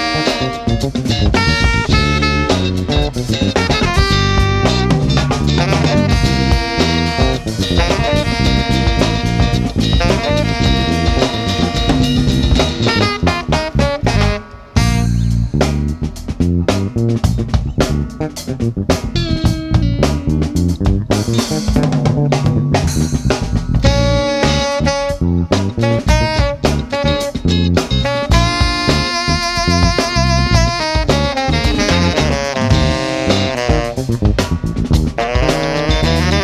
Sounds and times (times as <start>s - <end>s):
Music: 0.0s - 36.4s.